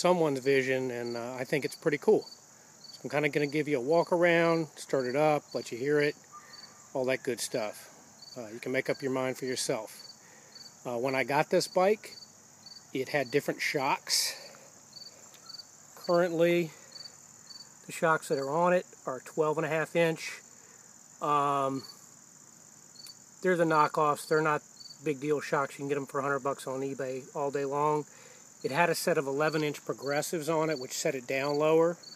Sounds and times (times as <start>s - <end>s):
Speech: 0.0s - 2.3s, 3.0s - 6.2s, 7.0s - 10.0s, 10.9s - 12.2s, 13.0s - 14.5s, 16.0s - 16.8s, 17.9s - 20.4s, 21.2s - 21.9s, 23.4s - 32.0s.